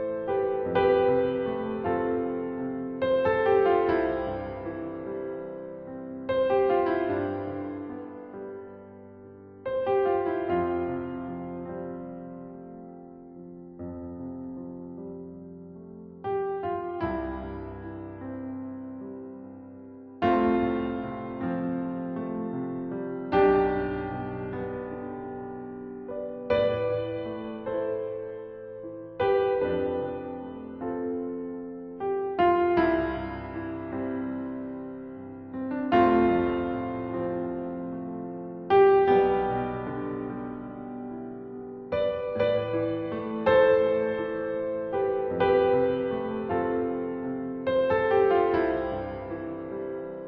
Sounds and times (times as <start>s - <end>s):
Music: 0.0s - 50.2s.